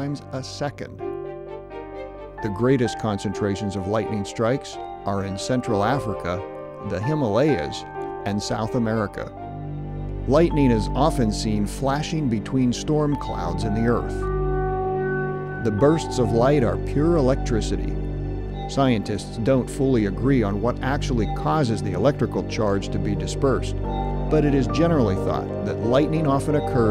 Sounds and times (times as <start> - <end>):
Speech: 0.0 - 1.0, 2.4 - 9.4, 10.3 - 14.2, 15.6 - 18.0, 18.7 - 26.9
Music: 0.0 - 26.9.